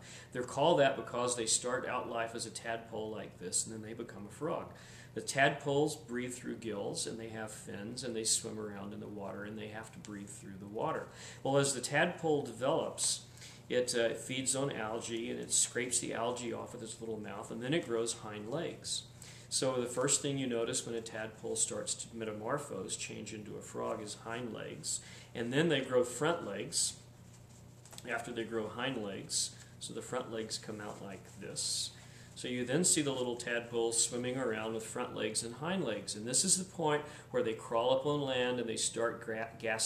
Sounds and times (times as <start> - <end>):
Speech: 0.3 - 27.0, 28.0 - 39.8.